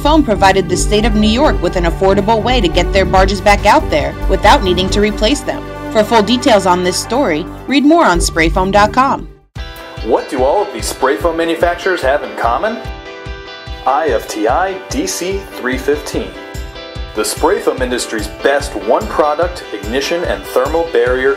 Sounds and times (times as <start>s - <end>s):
Speech: 0.0s - 9.3s, 10.0s - 12.9s, 13.9s - 16.4s, 17.2s - 21.3s
Music: 0.0s - 21.3s.